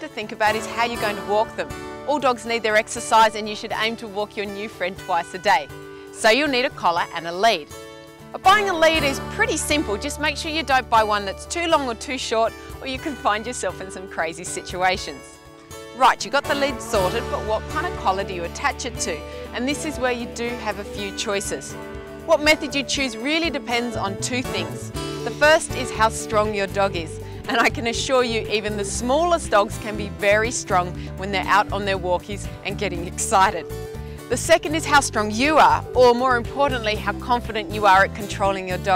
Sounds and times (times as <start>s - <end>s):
Speech: 0.0s - 7.6s, 8.4s - 15.3s, 16.0s - 21.7s, 22.3s - 33.6s, 34.3s - 38.9s
Music: 0.0s - 38.9s.